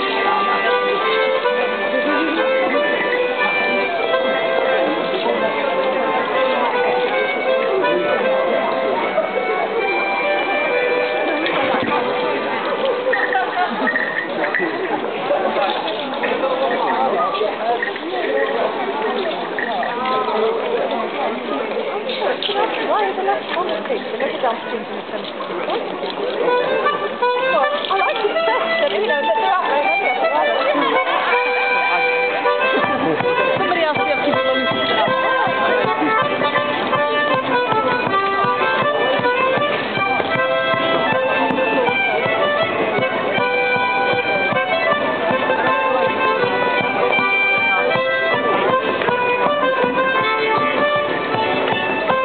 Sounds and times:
Music: 0:00.0 - 0:21.2, 0:25.2 - 0:52.2
Speech: 0:00.0 - 0:52.2.

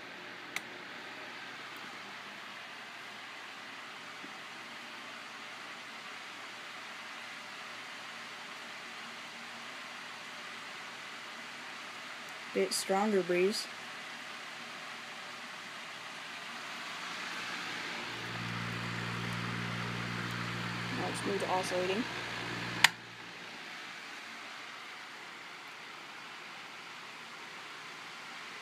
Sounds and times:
Inside, small room: 0:00.0 - 0:28.6
Mechanical fan: 0:00.0 - 0:28.6
Speech: 0:12.5 - 0:13.7, 0:20.9 - 0:22.1.

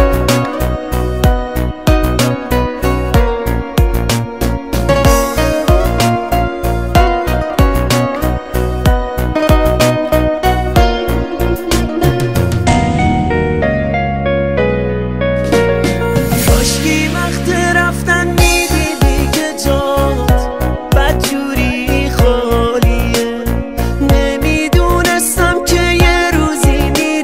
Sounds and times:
Music: 0:00.0 - 0:27.2.

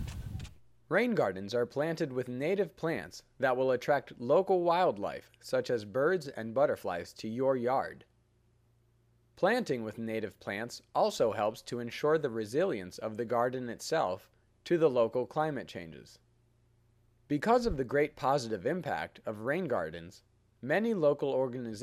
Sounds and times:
Speech: 0:00.9 - 0:08.1, 0:09.4 - 0:16.3, 0:17.3 - 0:21.8.

